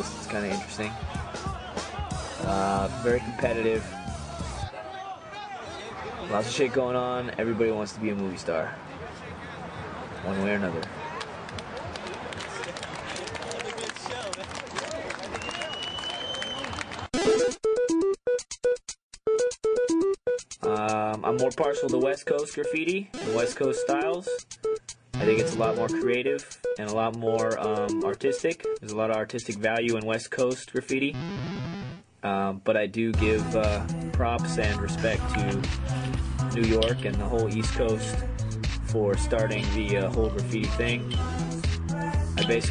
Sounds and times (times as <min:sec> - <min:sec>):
Speech: 0:00.0 - 0:01.0, 0:02.4 - 0:03.9, 0:04.7 - 0:10.9, 0:20.6 - 0:24.4, 0:25.2 - 0:31.2, 0:32.2 - 0:35.6, 0:36.5 - 0:38.2, 0:38.9 - 0:41.1, 0:42.4 - 0:42.7
Hip hop music: 0:00.0 - 0:04.8, 0:17.2 - 0:32.0, 0:33.2 - 0:42.7.